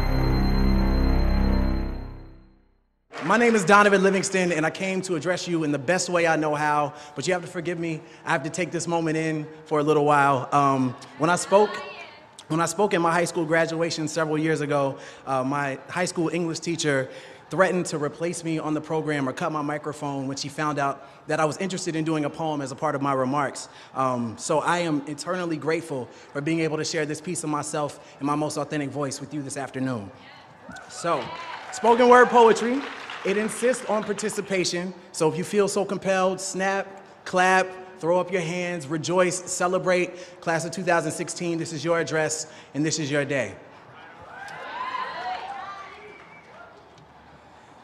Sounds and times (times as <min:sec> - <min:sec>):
Narration, monologue: 0:03.1 - 0:43.8
Male speech, man speaking: 0:03.2 - 0:30.2, 0:30.9 - 0:43.6.